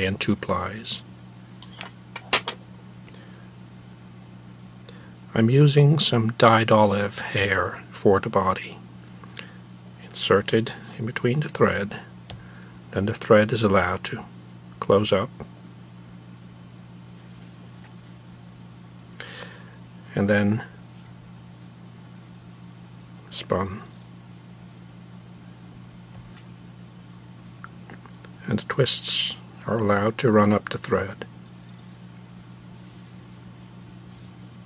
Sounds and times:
Speech: 0.0 - 1.0, 5.3 - 8.8, 10.0 - 12.1, 12.9 - 15.5, 20.1 - 20.8, 23.3 - 23.9, 28.4 - 31.3.

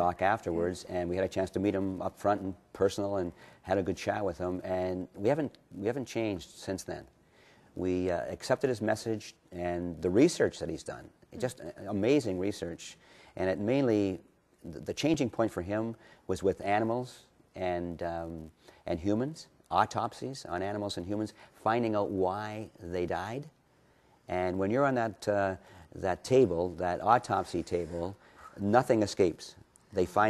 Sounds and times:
Speech: 0.0 - 7.1, 7.8 - 23.6, 24.3 - 30.2.

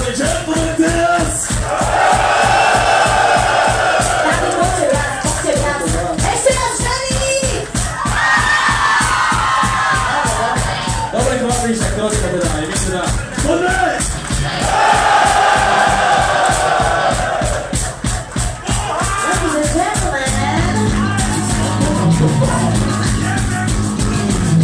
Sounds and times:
Dance music: 1.5 - 11.1, 12.9 - 24.6.

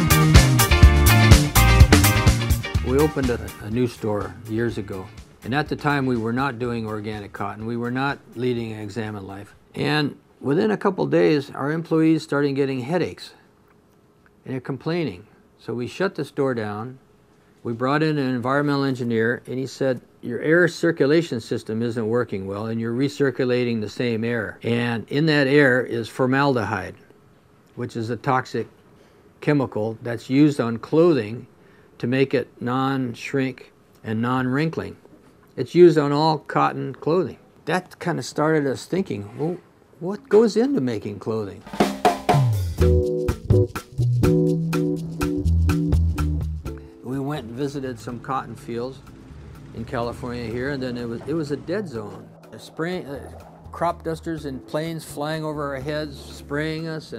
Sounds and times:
Music: 0.0 - 8.3, 41.7 - 57.1
Speech: 2.8 - 13.4, 14.4 - 17.0, 17.6 - 27.1, 27.8 - 28.7, 29.4 - 41.7, 47.1 - 49.0, 49.7 - 57.1.

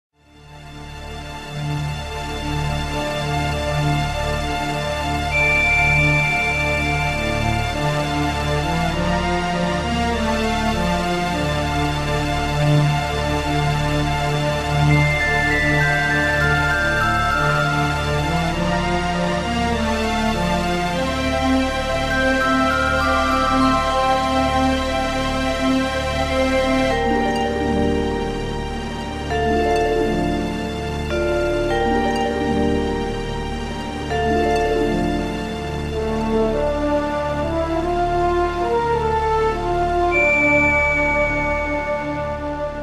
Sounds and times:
Video game music: 0.5 - 42.8.

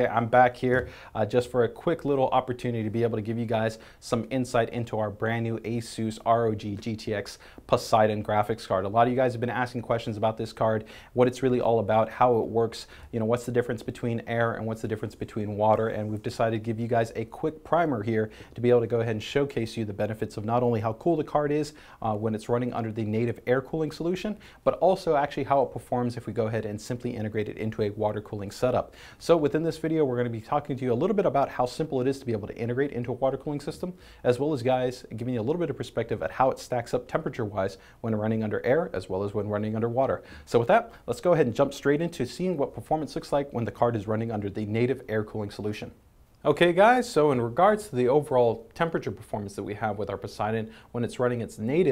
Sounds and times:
Speech: 0.0 - 51.9.

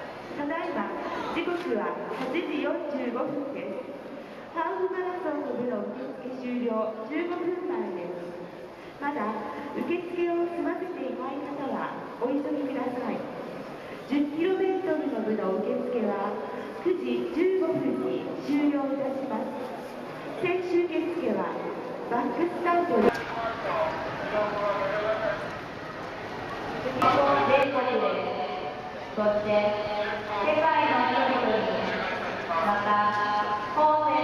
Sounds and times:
Speech: 14.1 - 19.6, 26.9 - 28.6.

